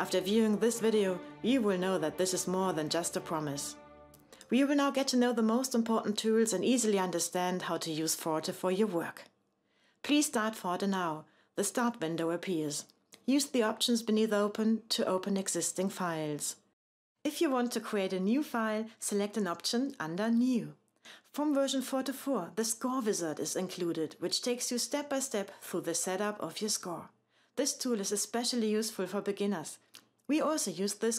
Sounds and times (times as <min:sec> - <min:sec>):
Speech: 0:00.0 - 0:03.8, 0:04.4 - 0:09.3, 0:10.1 - 0:16.7, 0:17.3 - 0:31.1.